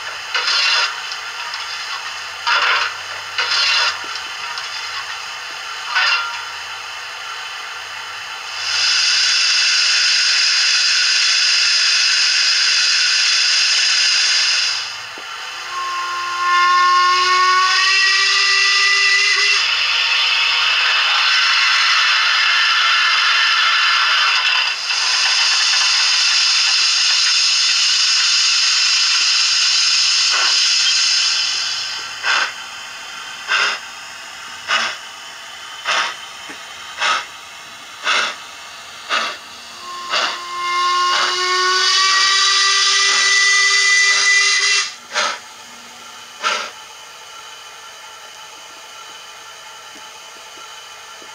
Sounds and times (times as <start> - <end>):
Hiss: 0.0 - 7.8, 8.4 - 15.9, 16.5 - 45.4, 46.4 - 46.8.